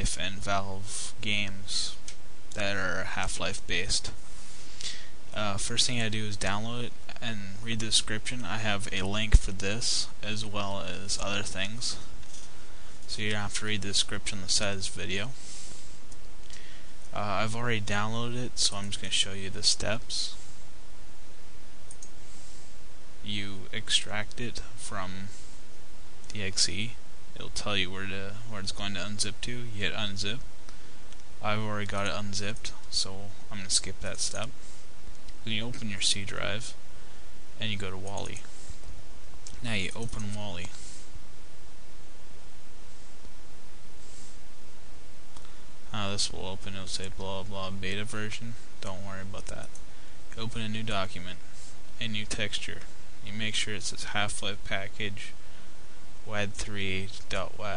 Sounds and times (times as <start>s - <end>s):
Speech: 0.0s - 2.0s, 2.6s - 4.2s, 5.3s - 12.1s, 13.1s - 15.4s, 17.1s - 20.4s, 23.2s - 25.4s, 26.3s - 30.5s, 31.4s - 34.5s, 35.4s - 36.8s, 37.6s - 38.5s, 39.5s - 40.8s, 45.9s - 49.8s, 50.4s - 51.4s, 52.0s - 55.4s, 56.3s - 57.7s.